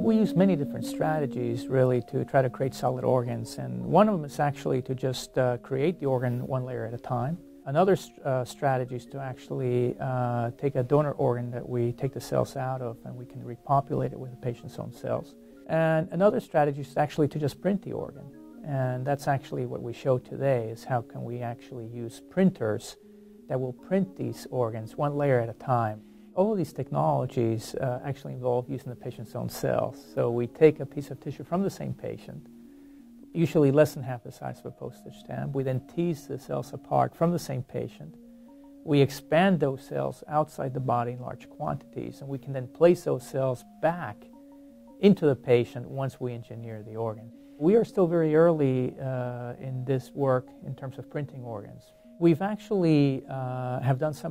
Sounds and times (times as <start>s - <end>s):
Speech: 0.0s - 32.5s, 33.3s - 38.2s, 38.9s - 44.3s, 45.0s - 54.3s
Music: 0.0s - 54.3s.